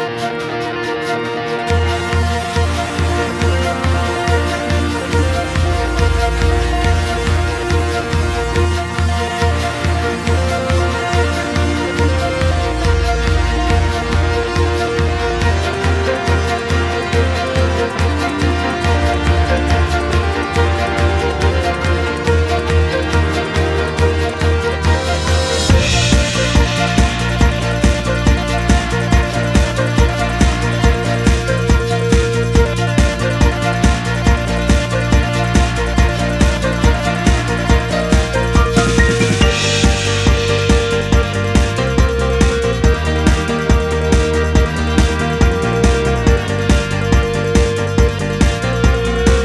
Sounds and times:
Music: 0.0 - 49.4.

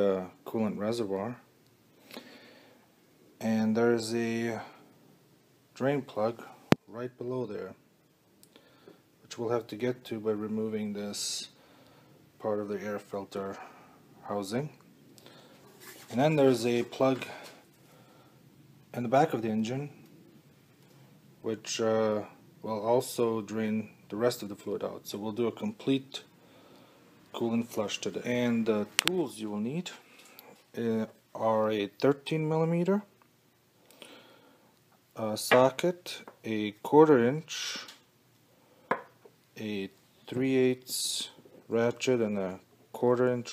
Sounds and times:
Speech: 0.0 - 1.5, 3.4 - 4.8, 5.8 - 7.8, 9.3 - 11.6, 12.4 - 14.8, 16.1 - 17.5, 18.9 - 20.0, 21.4 - 26.3, 27.3 - 30.0, 30.7 - 33.1, 35.2 - 38.0, 39.6 - 43.5.

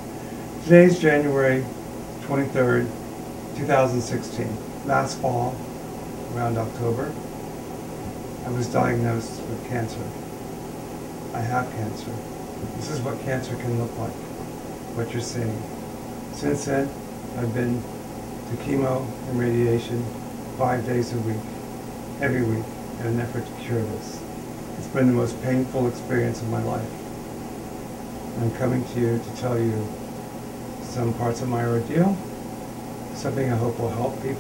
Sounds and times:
Speech: 0.6 - 3.0, 3.6 - 5.6, 6.3 - 7.2, 8.4 - 10.2, 11.4 - 14.2, 15.0 - 15.7, 16.3 - 17.9, 18.5 - 21.5, 22.2 - 24.2, 24.8 - 27.0, 28.4 - 30.0, 30.8 - 32.3, 33.2 - 34.4.

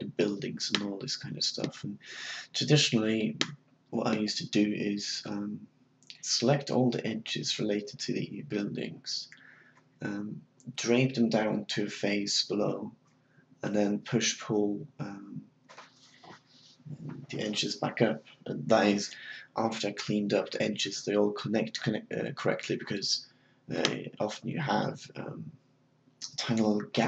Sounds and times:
Speech: 0.0 - 12.9, 13.6 - 15.4, 16.2 - 25.5, 26.2 - 27.0.

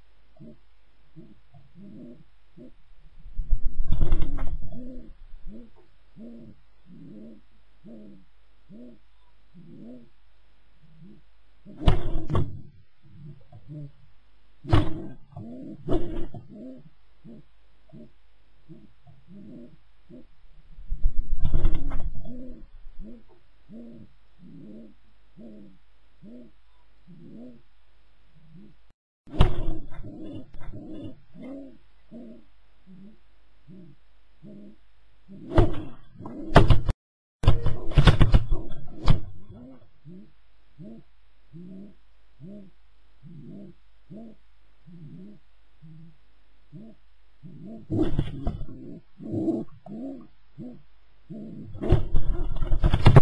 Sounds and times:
Inside, small room: 0.0 - 53.2
Pigeon, dove: 1.2 - 2.8, 3.4 - 10.1, 10.8 - 14.0, 14.6 - 20.3, 21.0 - 27.6, 28.4 - 53.2.

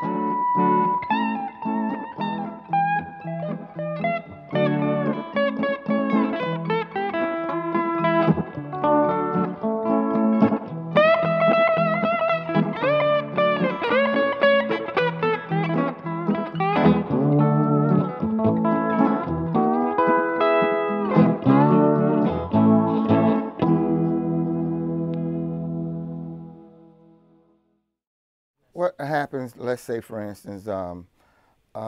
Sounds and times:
Steel guitar, slide guitar: 0.0 - 27.0
Bass guitar: 0.0 - 27.1
Distortion: 0.0 - 27.6.

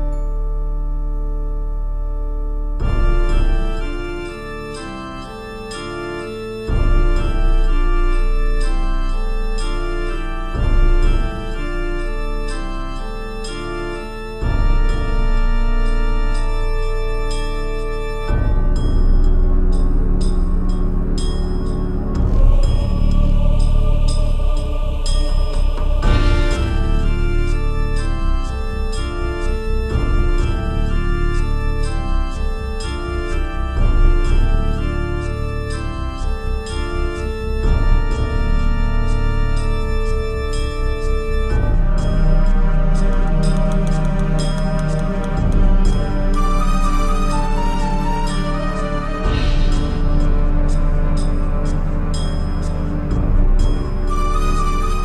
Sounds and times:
Music: 0.0 - 55.0.

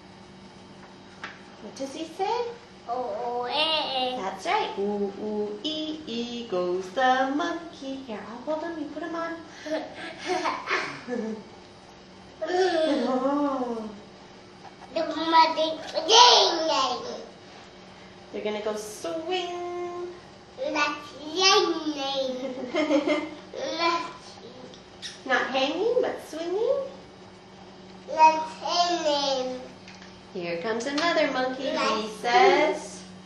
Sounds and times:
Conversation: 0.9 - 33.2
Female speech, woman speaking: 1.6 - 2.6, 4.2 - 9.5, 12.8 - 14.1, 18.3 - 20.2, 25.2 - 27.0, 30.3 - 33.1.

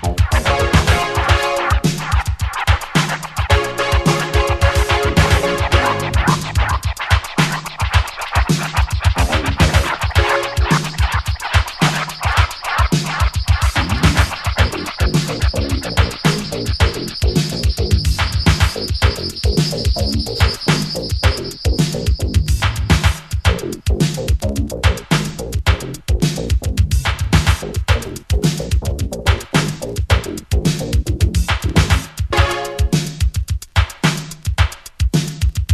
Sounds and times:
Music: 0.0 - 35.7.

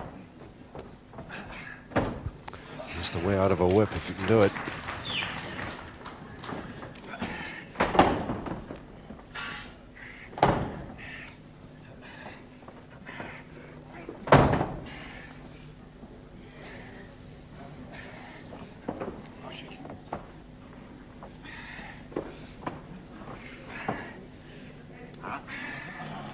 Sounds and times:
Inside, large room or hall: 0.0 - 26.3
Slam: 14.3 - 14.8.

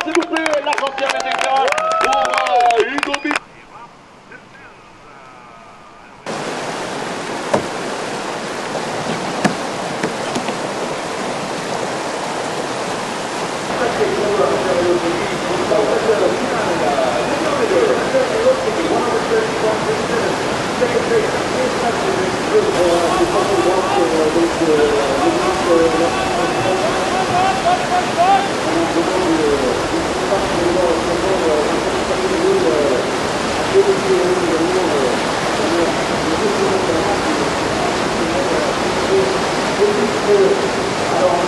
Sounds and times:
Speech: 0.0 - 6.3, 13.7 - 33.1, 33.7 - 41.4.

